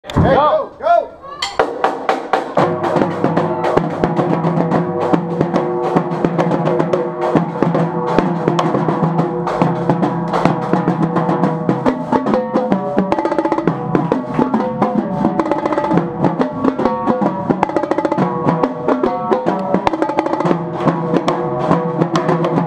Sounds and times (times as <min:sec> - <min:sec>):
Speech: 0:00.1 - 0:01.4
Inside, large room or hall: 0:00.1 - 0:22.6
Drum kit: 0:01.4 - 0:22.6
Snare drum: 0:01.4 - 0:22.6.